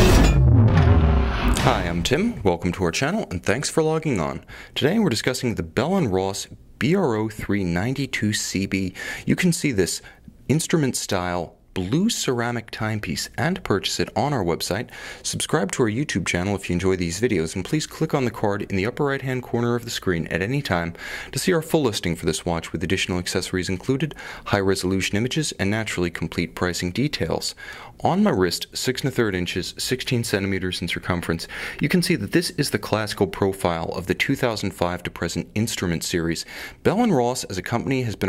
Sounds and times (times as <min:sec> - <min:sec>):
Speech: 0:01.5 - 0:38.2.